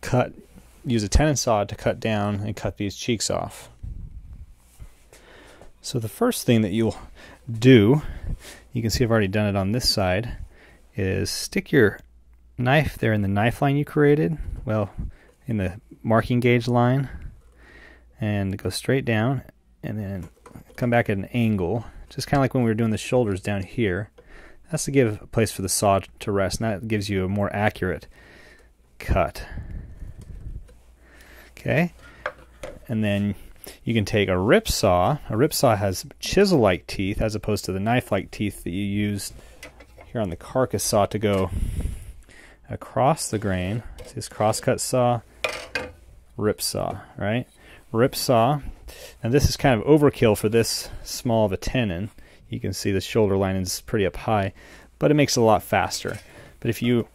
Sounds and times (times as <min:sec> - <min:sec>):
Speech: 0:00.0 - 0:03.8, 0:05.8 - 0:17.3, 0:18.2 - 0:28.1, 0:29.0 - 0:29.7, 0:31.6 - 0:32.0, 0:32.8 - 0:39.4, 0:40.1 - 0:41.6, 0:42.7 - 0:45.3, 0:46.4 - 0:57.1.